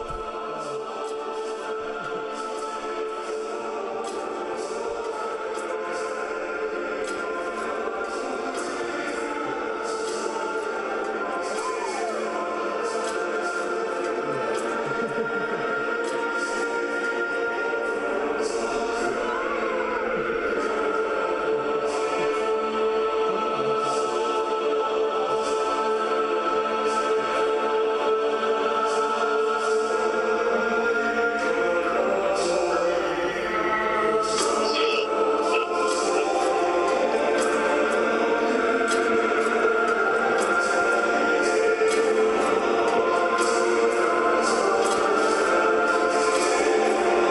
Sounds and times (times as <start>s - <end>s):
Music: 0.0s - 47.3s.